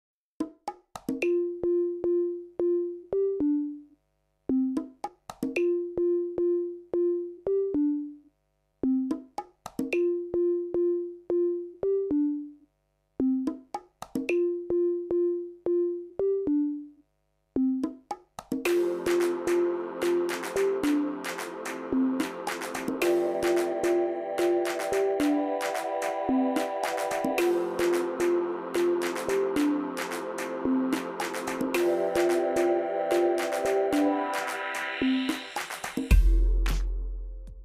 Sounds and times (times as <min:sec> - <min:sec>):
Music: 0:00.4 - 0:37.6.